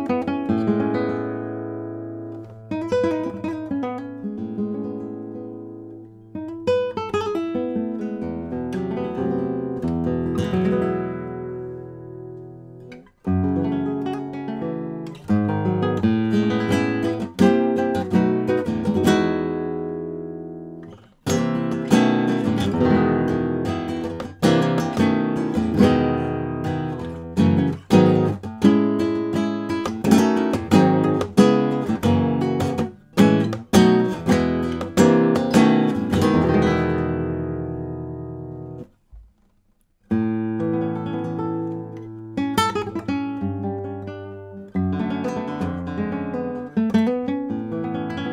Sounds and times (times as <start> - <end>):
Acoustic guitar: 0.0 - 48.3.